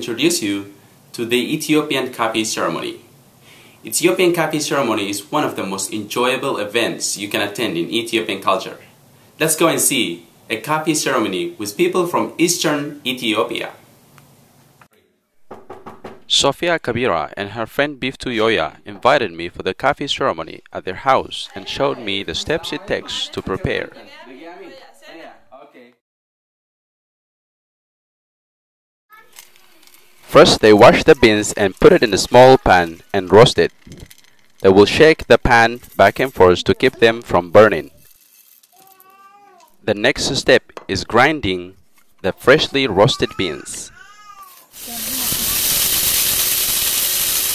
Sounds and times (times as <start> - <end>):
Speech: 16.3 - 26.0, 30.3 - 33.7, 34.6 - 38.0, 39.8 - 44.0.